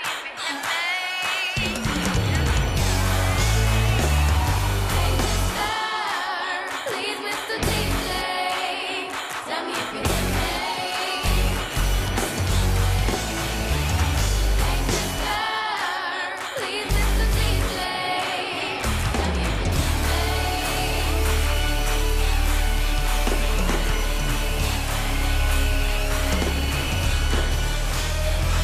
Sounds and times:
Rock and roll: 0.0s - 28.6s
Heavy metal: 1.6s - 5.8s, 7.6s - 8.3s, 9.8s - 15.6s, 16.6s - 28.6s.

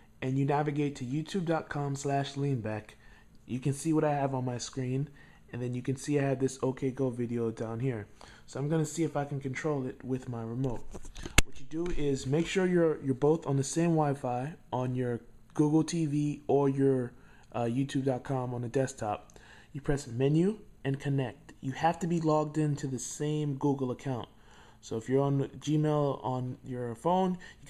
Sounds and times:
Speech: 0.2s - 27.6s.

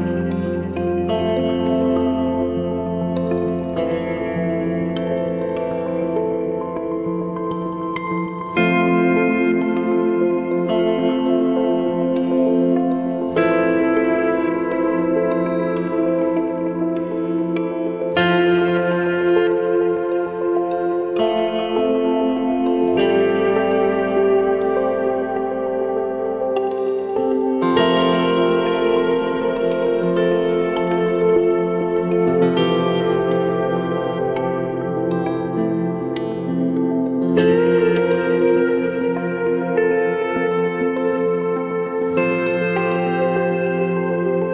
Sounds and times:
Distortion: 0.0s - 44.5s.

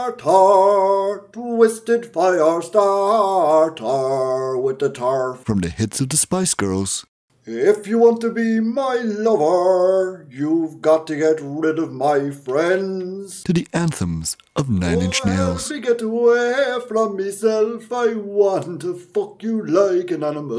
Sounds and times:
Speech: 1.4s - 20.5s.

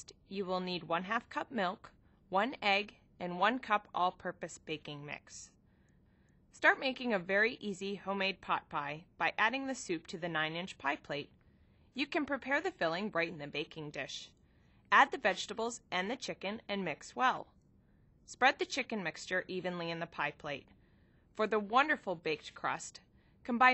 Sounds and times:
Speech: 0.0s - 5.5s, 6.6s - 11.3s, 12.0s - 14.3s, 14.9s - 17.5s, 18.3s - 20.7s, 21.4s - 23.7s.

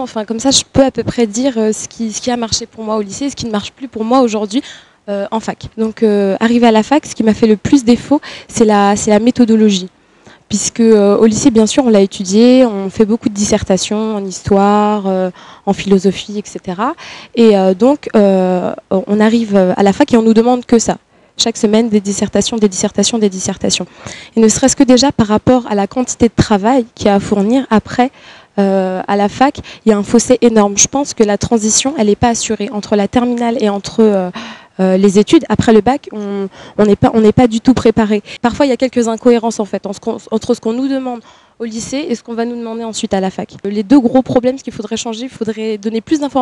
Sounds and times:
Speech: 0.0s - 9.9s, 10.5s - 46.4s.

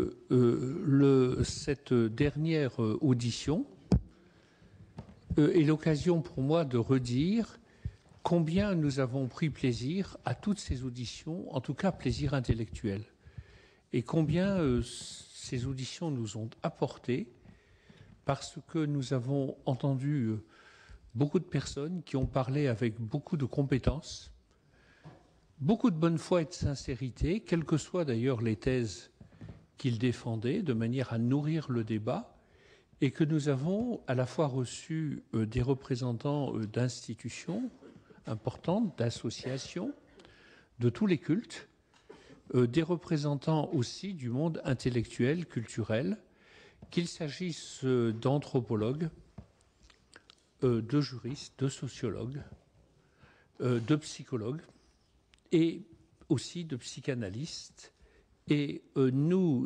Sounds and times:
Speech: 0.0s - 4.0s, 5.3s - 7.6s, 8.2s - 13.2s, 13.9s - 17.4s, 18.3s - 20.5s, 21.2s - 24.4s, 25.6s - 29.2s, 29.8s - 32.4s, 33.0s - 40.1s, 40.8s - 41.8s, 42.5s - 46.3s, 46.9s - 49.2s, 50.6s - 52.6s, 53.6s - 54.8s, 55.5s - 59.6s.

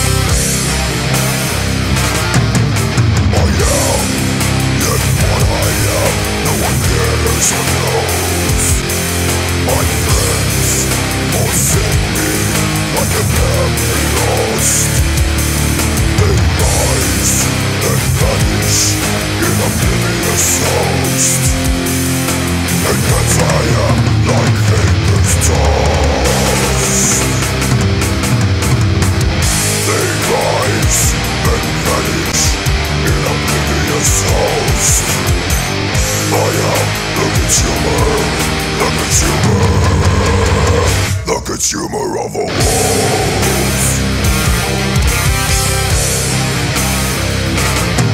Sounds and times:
Rhythm and blues: 0.0s - 41.4s, 42.5s - 48.1s.

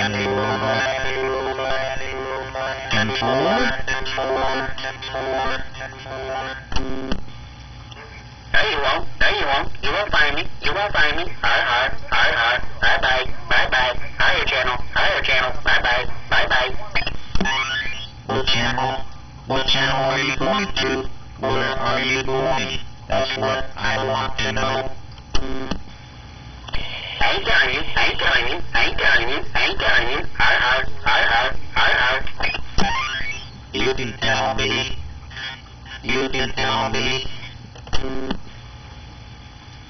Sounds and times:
Speech: 0.0s - 6.7s, 8.6s - 17.0s, 18.3s - 25.0s, 33.8s - 35.0s, 36.0s - 37.5s
Radio: 0.0s - 39.6s.

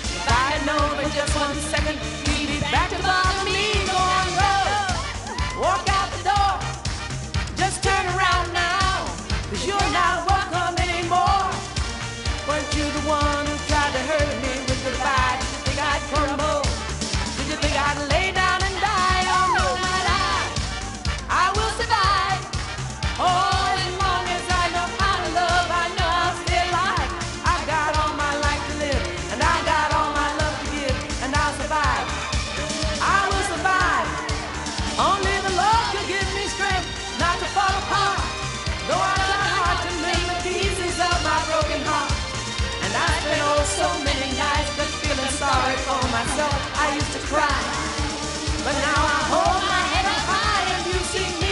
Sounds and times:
Music: 0.0s - 51.5s.

